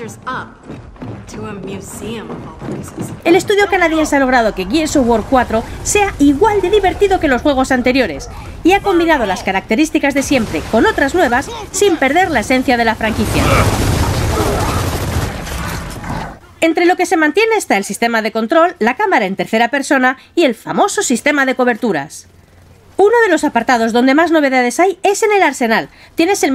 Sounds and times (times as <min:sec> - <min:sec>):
Speech: 0:01.3 - 0:13.7, 0:23.0 - 0:26.5.